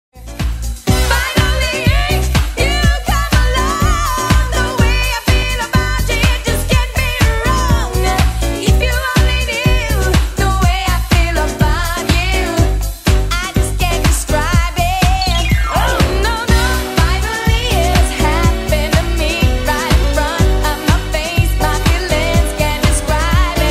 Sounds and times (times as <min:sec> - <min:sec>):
Disco: 0:00.2 - 0:23.7
Funk: 0:00.2 - 0:23.7.